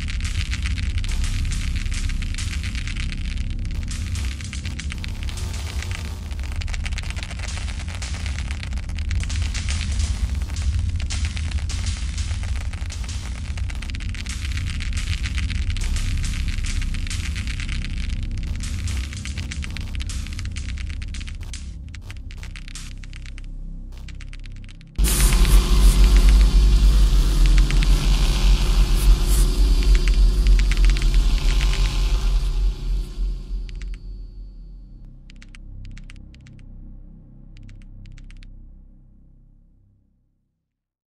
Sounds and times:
Music: 0.0 - 40.8.

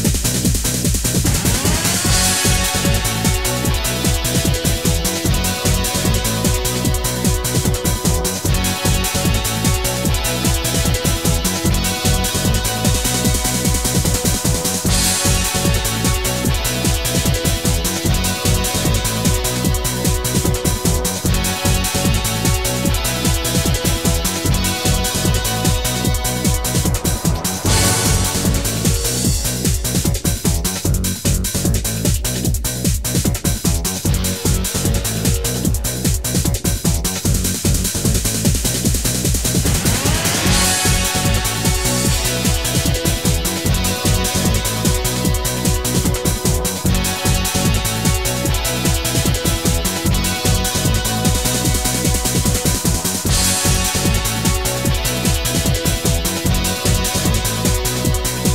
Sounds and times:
Exciting music: 0.0 - 58.5.

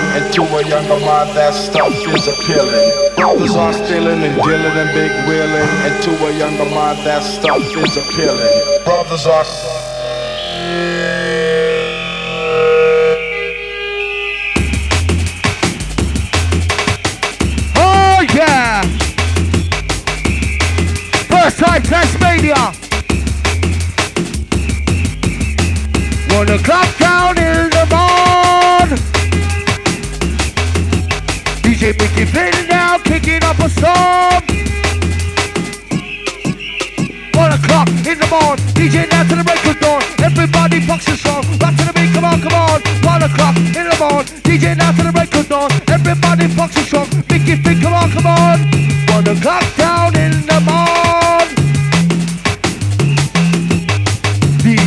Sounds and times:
Music: 0.0 - 54.8.

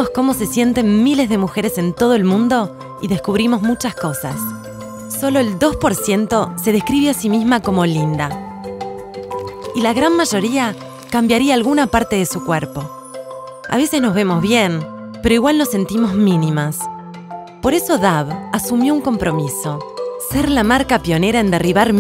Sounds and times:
Speech: 0.0 - 4.5, 5.2 - 8.4, 9.8 - 12.9, 13.7 - 16.9, 17.7 - 22.0
Music: 0.0 - 22.0.

